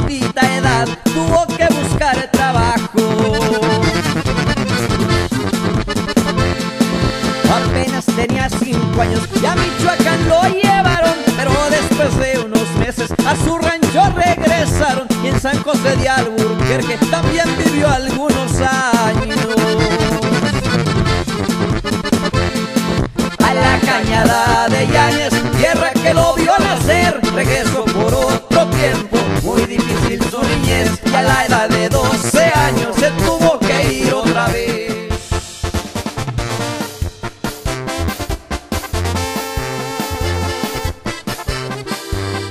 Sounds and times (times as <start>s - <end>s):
Music of Latin America: 0.0s - 42.5s.